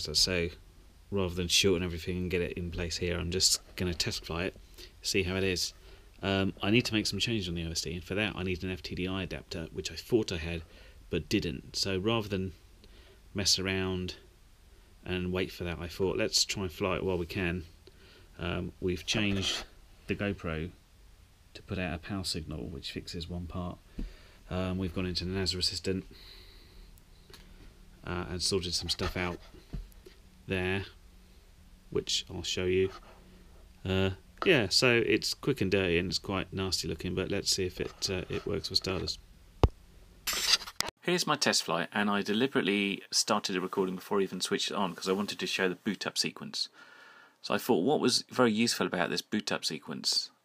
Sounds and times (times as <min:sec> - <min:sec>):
Speech: 0:00.0 - 0:12.6, 0:13.3 - 0:14.2, 0:15.0 - 0:17.7, 0:18.4 - 0:20.8, 0:21.6 - 0:23.8, 0:24.5 - 0:26.1, 0:28.0 - 0:29.5, 0:30.5 - 0:31.0, 0:31.9 - 0:33.0, 0:33.8 - 0:39.2, 0:41.0 - 0:46.7, 0:47.4 - 0:50.4.